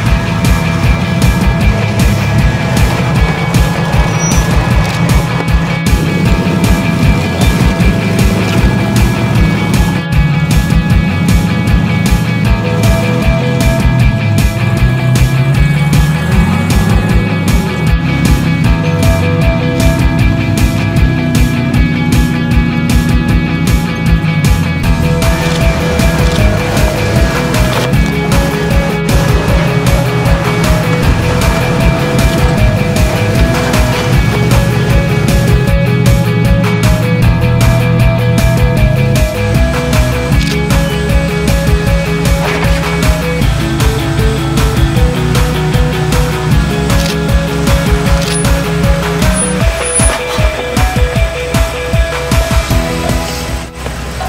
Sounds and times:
Car: 0:00.0 - 0:54.2
Music: 0:00.0 - 0:54.2.

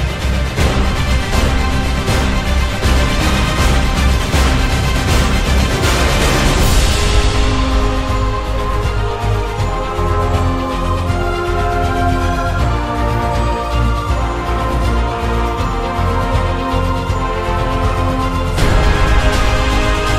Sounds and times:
Theme music: 0:00.0 - 0:20.1.

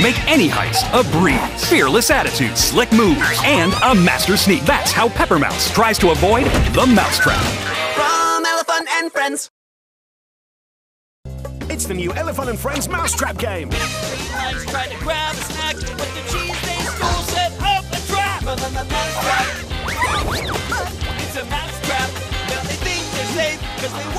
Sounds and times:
Music: 0:00.0 - 0:09.0, 0:11.3 - 0:24.1.

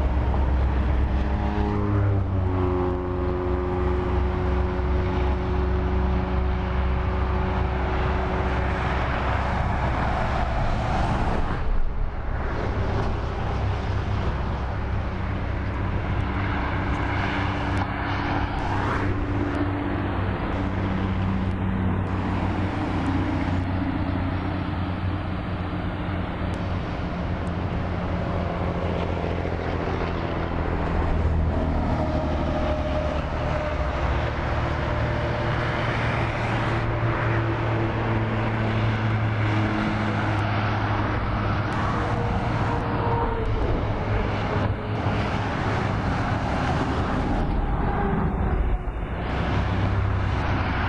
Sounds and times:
Bus: 0:00.0 - 0:50.8.

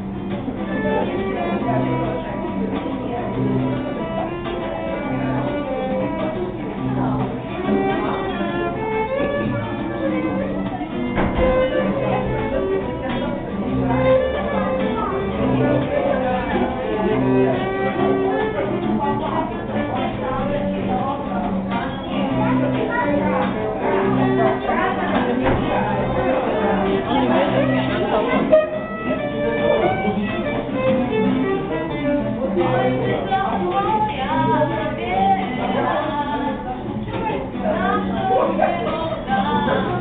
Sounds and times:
Folk music: 0:00.0 - 0:40.0.

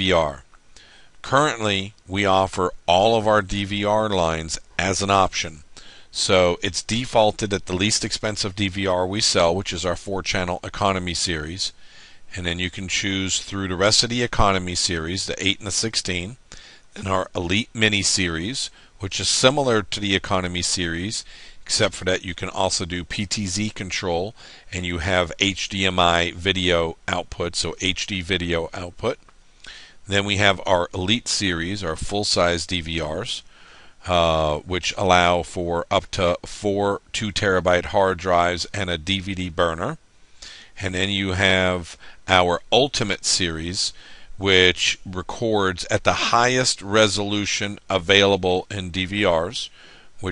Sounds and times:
Speech: 0:00.0 - 0:00.5, 0:01.2 - 0:16.4, 0:17.0 - 0:29.2, 0:30.1 - 0:40.0, 0:40.8 - 0:50.3.

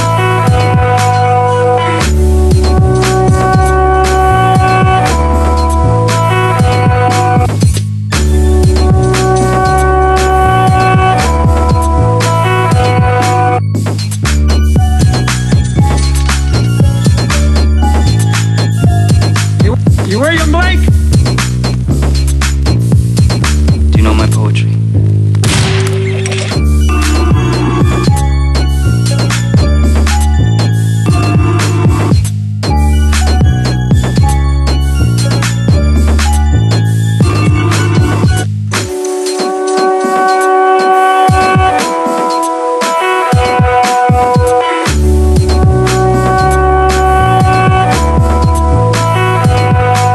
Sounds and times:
Gunshot, gunfire: 0:25.4 - 0:26.1.

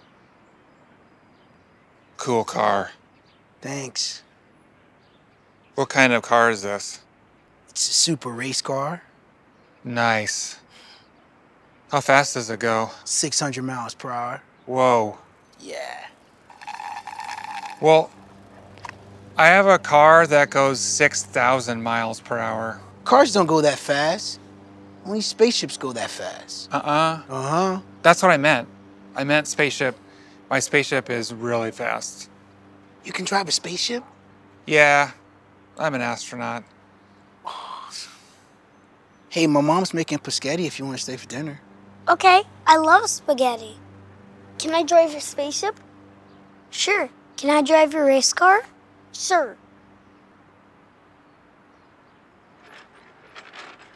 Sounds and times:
Speech: 0:02.2 - 0:03.0, 0:03.6 - 0:04.2, 0:05.8 - 0:07.0, 0:07.7 - 0:09.1, 0:11.9 - 0:16.1, 0:19.4 - 0:24.4, 0:25.1 - 0:32.3, 0:34.7 - 0:35.2, 0:35.8 - 0:36.6, 0:39.3 - 0:43.8, 0:44.6 - 0:45.8, 0:46.7 - 0:49.6.

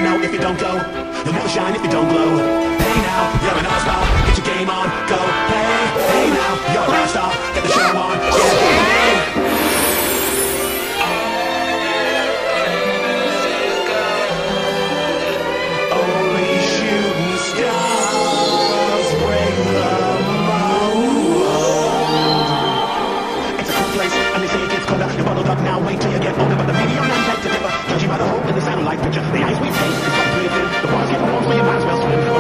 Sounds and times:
Music: 0:00.0 - 0:32.4.

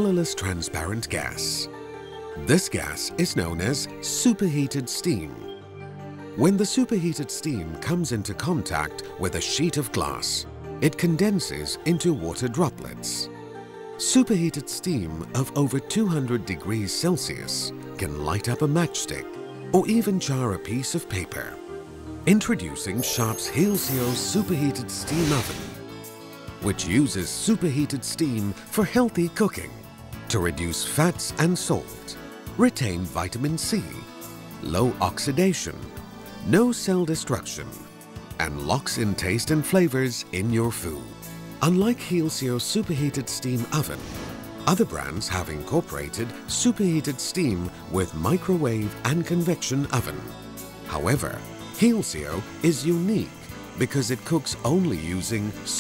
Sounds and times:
Speech: 0:00.0 - 0:01.7, 0:02.4 - 0:05.5, 0:06.4 - 0:13.3, 0:14.0 - 0:21.6, 0:22.3 - 0:25.7, 0:26.6 - 0:37.8, 0:38.4 - 0:44.1, 0:44.7 - 0:50.3, 0:50.9 - 0:55.8
Music: 0:00.0 - 0:55.8.

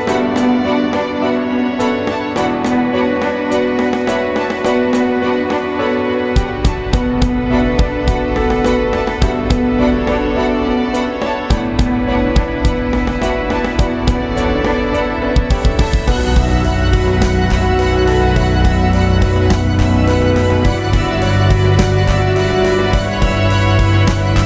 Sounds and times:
Music: 0:00.0 - 0:24.4.

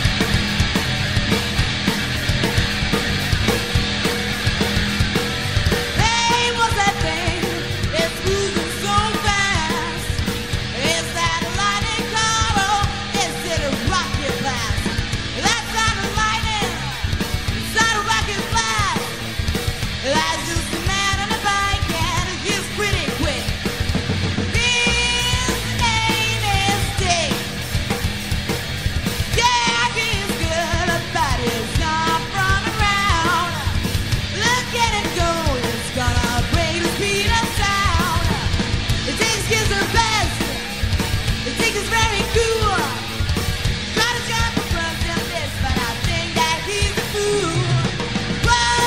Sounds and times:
Music: 0:00.0 - 0:48.8.

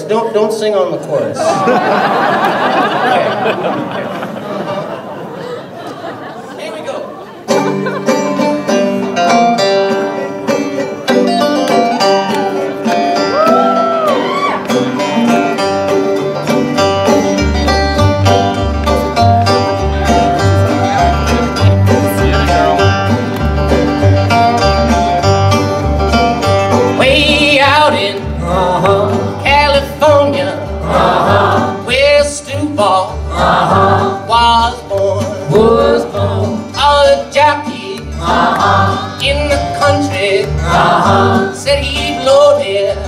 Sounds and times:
Inside, large room or hall: 0:00.0 - 0:43.0
Music: 0:07.5 - 0:43.0.

